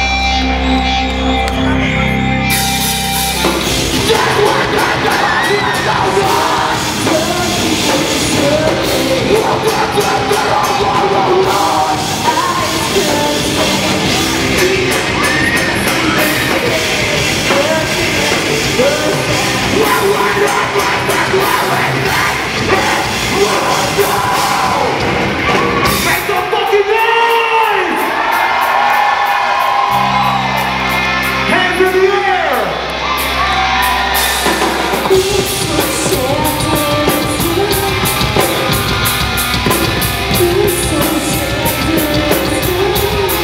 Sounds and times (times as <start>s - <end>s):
Music: 0.0s - 43.4s
Speech: 26.0s - 28.0s, 31.5s - 32.8s.